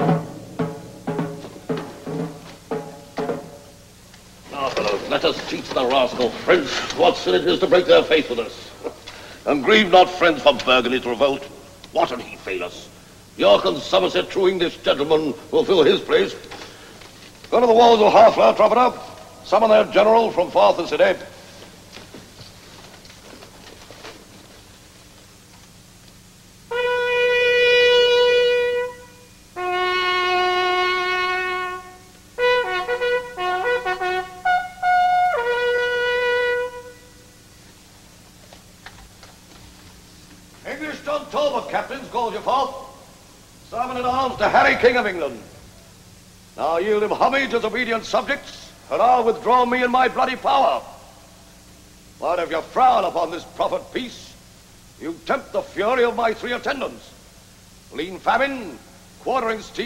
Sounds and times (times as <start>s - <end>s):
Shofar: 26.7s - 37.4s
Wind instrument, woodwind instrument: 26.7s - 37.4s.